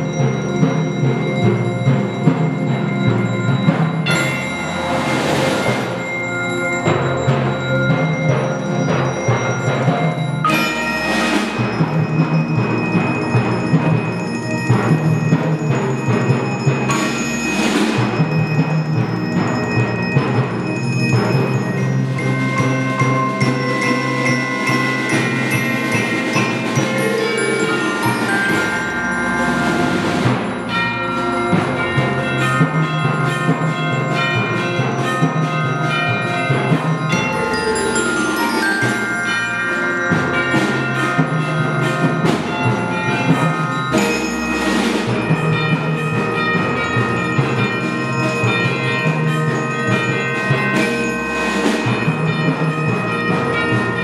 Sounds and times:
Tubular bells: 0:00.0 - 0:54.0.

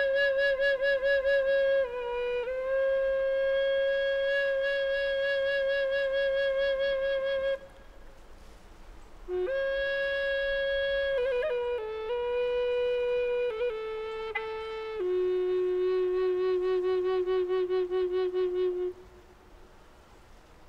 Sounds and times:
Music: 0:09.3 - 0:19.0.

